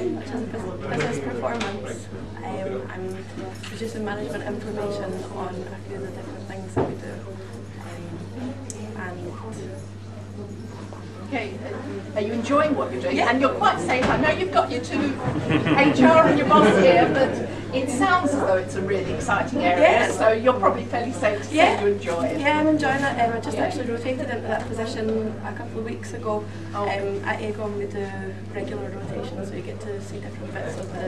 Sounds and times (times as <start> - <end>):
Speech: 0.0 - 31.0.